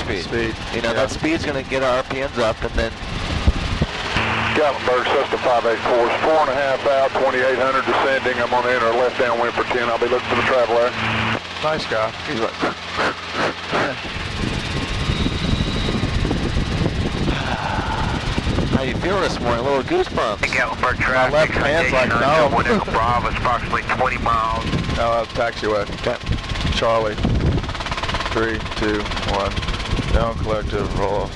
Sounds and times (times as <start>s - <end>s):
Fixed-wing aircraft, airplane: 0.0s - 31.3s
Helicopter: 0.0s - 31.3s.